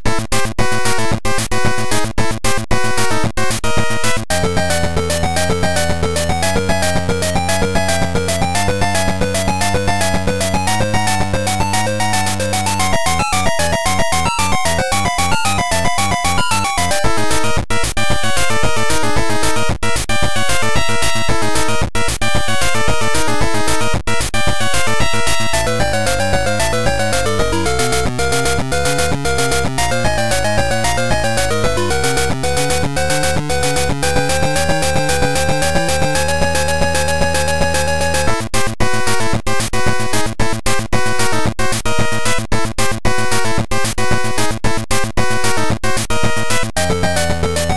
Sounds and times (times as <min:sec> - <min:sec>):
Music: 0:00.0 - 0:47.7.